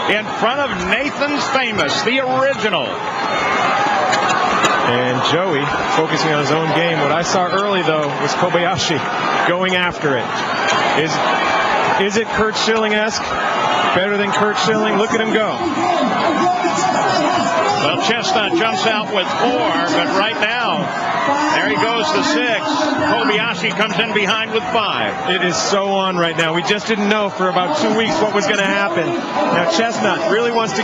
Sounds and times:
Speech: 0.0 - 3.0, 4.9 - 10.3, 12.0 - 13.2, 14.0 - 30.8.

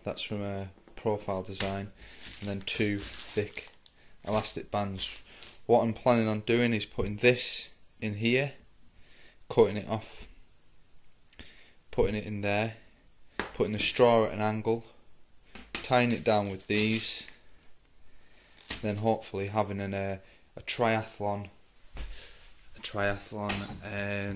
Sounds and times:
Speech: 0.0 - 3.7, 4.3 - 8.6, 9.5 - 10.3, 11.9 - 12.8, 13.6 - 15.0, 15.8 - 17.3, 18.8 - 21.6, 22.8 - 24.3.

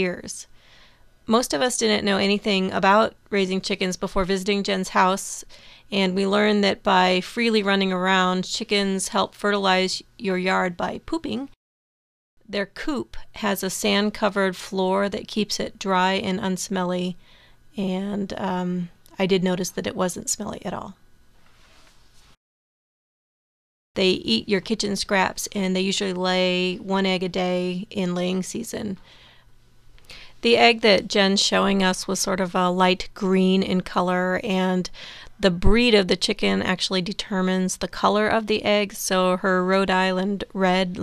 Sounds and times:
Speech: 0.0 - 0.5, 1.3 - 11.6, 12.5 - 17.2, 17.8 - 21.0, 24.0 - 29.0, 30.4 - 41.0.

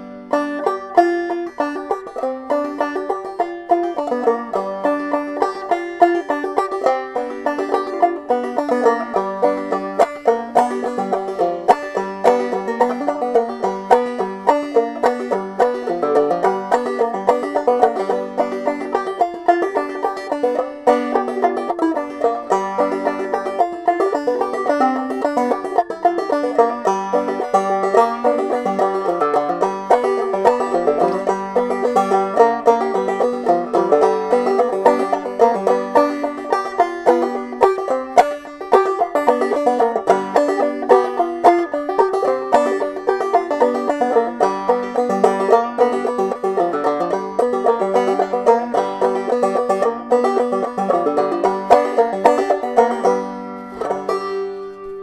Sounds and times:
Music: 0.0 - 55.0.

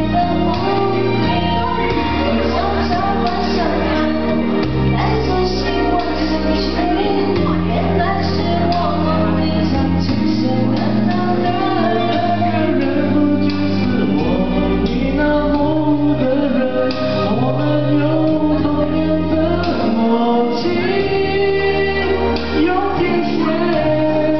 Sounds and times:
Music: 0.0 - 24.3.

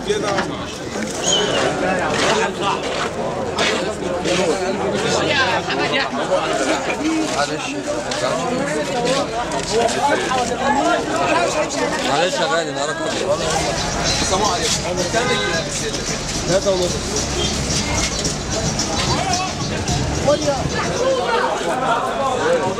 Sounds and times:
Speech: 0.0 - 22.7.

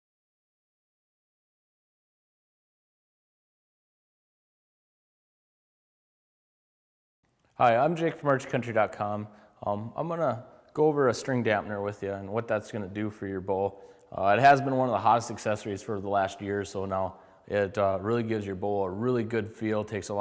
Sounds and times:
Speech: 7.6 - 20.2.

